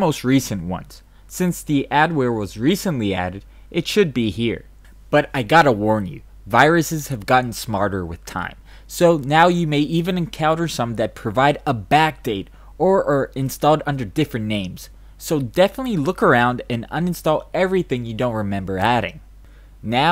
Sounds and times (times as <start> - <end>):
Speech: 0.0 - 19.2, 19.8 - 20.1.